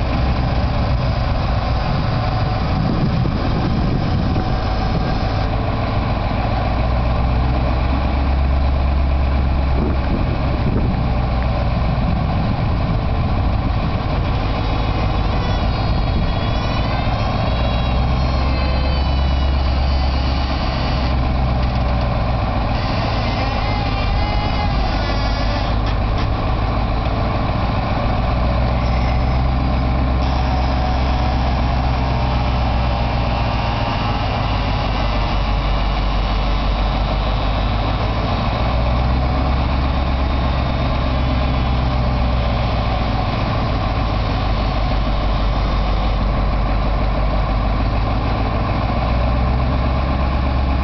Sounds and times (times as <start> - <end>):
Heavy engine (low frequency): 0.0 - 50.8
Truck: 0.0 - 50.8.